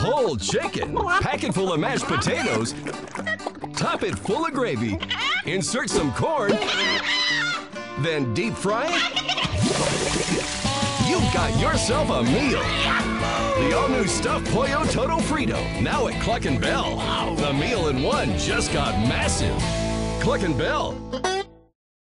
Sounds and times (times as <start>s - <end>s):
Speech: 0.0s - 2.7s, 3.8s - 7.0s, 8.0s - 9.0s, 11.1s - 12.8s, 13.6s - 19.6s, 20.2s - 21.0s
Music: 0.0s - 21.8s.